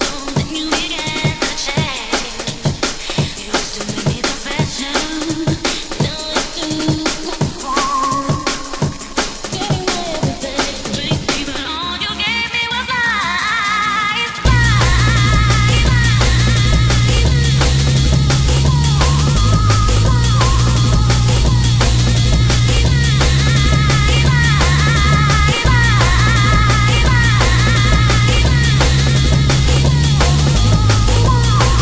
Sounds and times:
Music: 0:00.0 - 0:31.8.

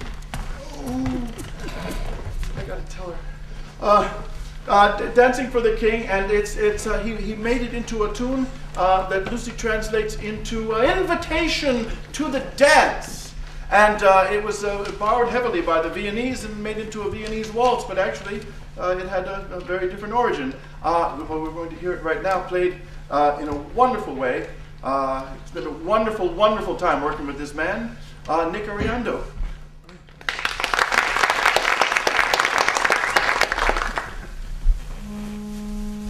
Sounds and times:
Speech: 0:02.6 - 0:29.4.

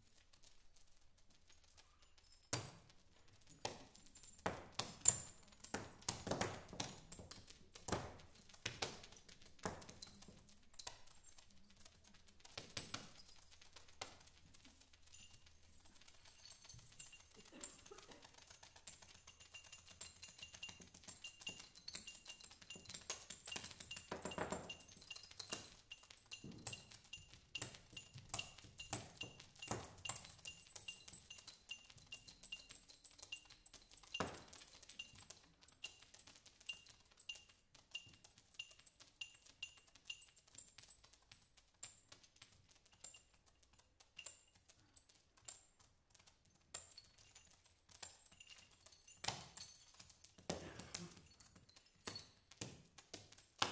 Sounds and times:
Percussion: 0:00.0 - 0:53.7.

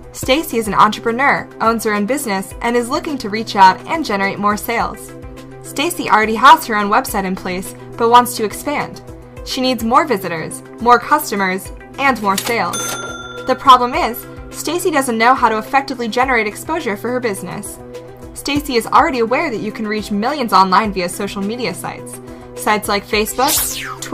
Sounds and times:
Music: 0:00.0 - 0:24.1
Speech: 0:00.2 - 0:05.1, 0:05.7 - 0:12.7, 0:13.7 - 0:17.8, 0:18.4 - 0:23.8.

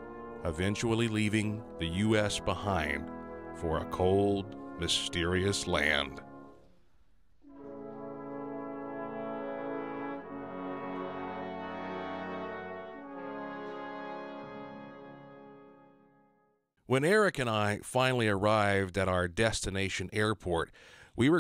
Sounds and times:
Music: 0:00.0 - 0:16.7
Speech: 0:00.4 - 0:06.2, 0:16.9 - 0:21.4.

